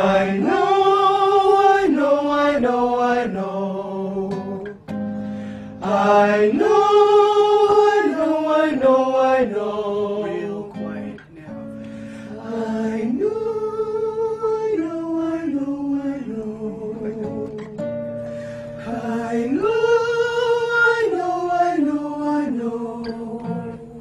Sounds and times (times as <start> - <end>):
Choir: 0.0 - 4.8, 5.7 - 11.2, 12.2 - 24.0
Male singing: 5.8 - 11.5, 12.4 - 17.8
Speech: 10.4 - 11.7.